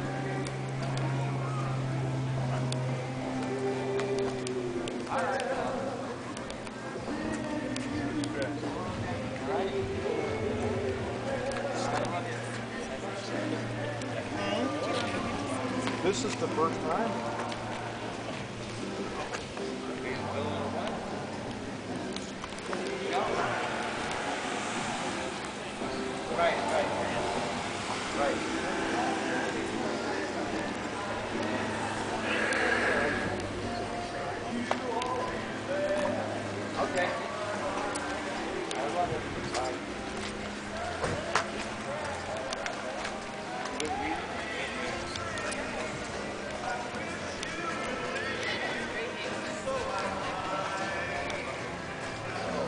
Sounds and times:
Music: 0.0 - 52.6
Speech: 11.3 - 17.8, 19.0 - 52.6.

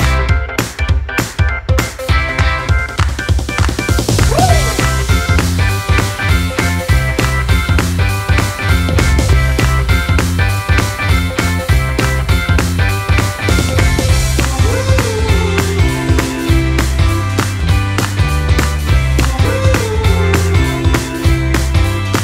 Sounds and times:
Music: 0.0 - 22.2.

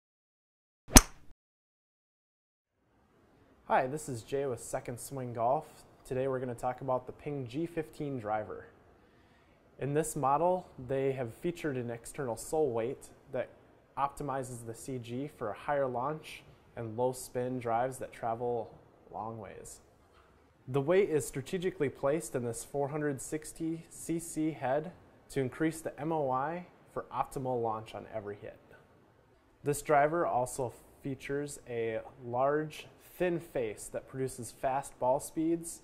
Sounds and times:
Speech: 3.7 - 8.8, 9.8 - 19.9, 20.7 - 28.8, 29.6 - 35.8.

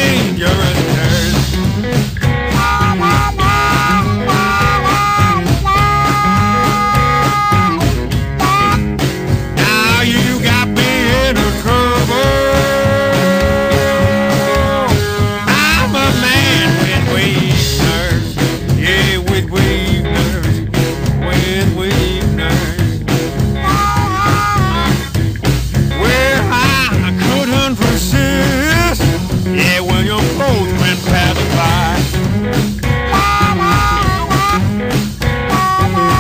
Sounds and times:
Rock and roll: 0.0 - 36.2.

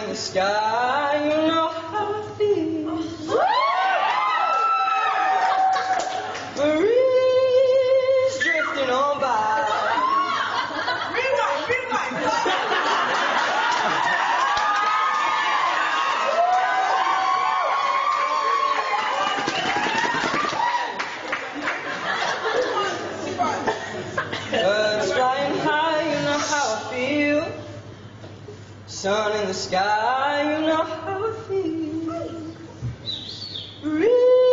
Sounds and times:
Male singing: 0.0 - 3.3, 6.5 - 10.0, 24.5 - 27.8, 28.9 - 32.6, 33.8 - 34.5.

